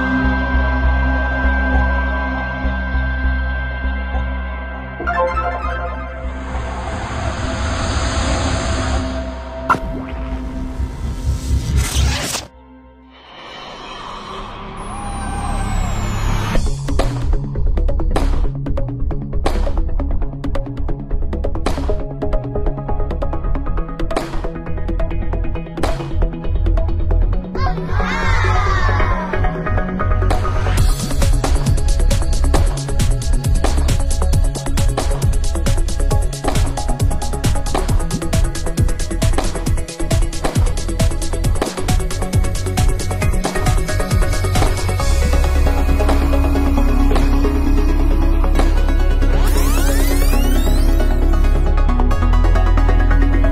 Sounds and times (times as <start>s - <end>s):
Music: 0.0s - 53.5s.